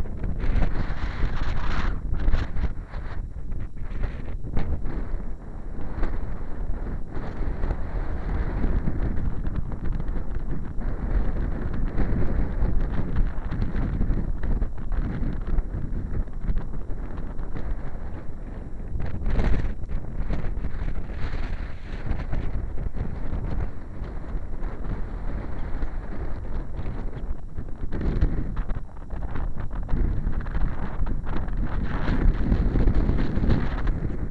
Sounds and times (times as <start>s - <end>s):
Wind noise (microphone): 0.0s - 34.3s.